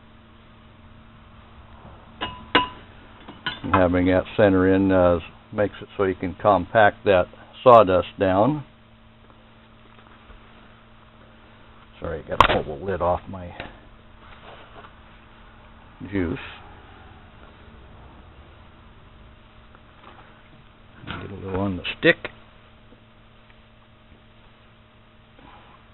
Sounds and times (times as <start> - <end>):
Speech: 3.6 - 8.7, 12.0 - 13.8, 16.0 - 16.6, 21.0 - 22.4.